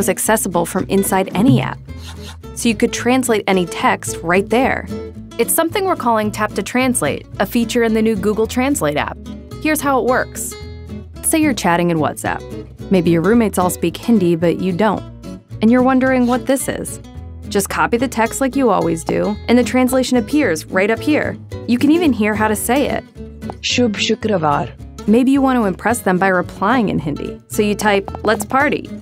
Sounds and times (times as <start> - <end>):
Speech: 0.0 - 1.8, 2.6 - 10.6, 11.3 - 15.0, 15.6 - 17.0, 17.6 - 23.0, 23.6 - 29.0
Music: 0.0 - 29.0.